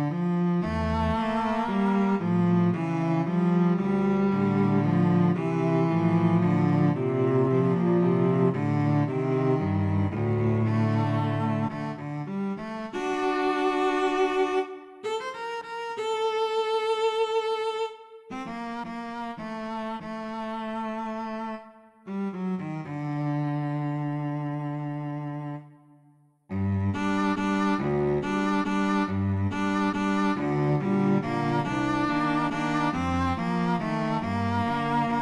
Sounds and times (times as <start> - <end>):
Cello: 0.0 - 35.2.